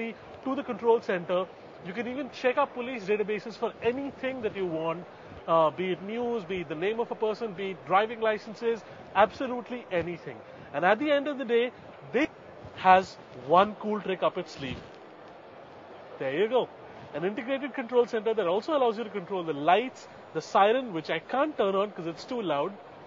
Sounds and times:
Speech: 0.0s - 14.9s, 16.2s - 22.8s.

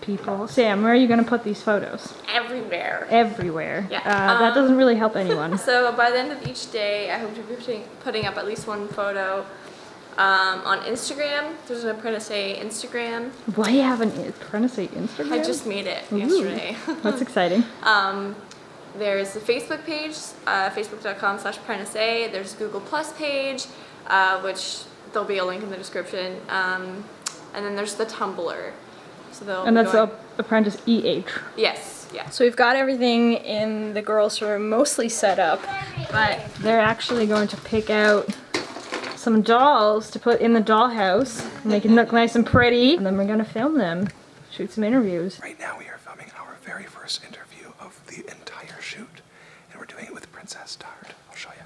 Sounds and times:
Speech: 0.0s - 9.4s, 12.6s - 18.4s, 29.4s - 38.4s.

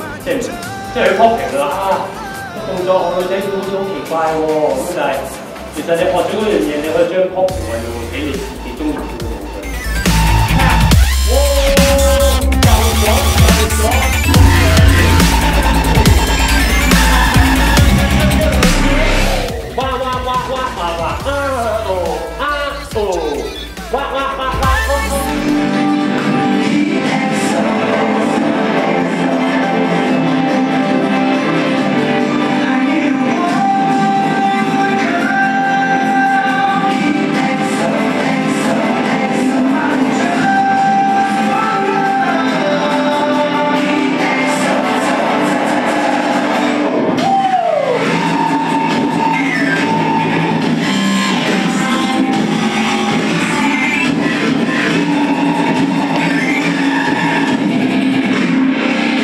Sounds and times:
Speech: 0.0s - 9.2s, 19.8s - 25.3s
Dubstep: 7.5s - 27.8s, 48.0s - 59.2s.

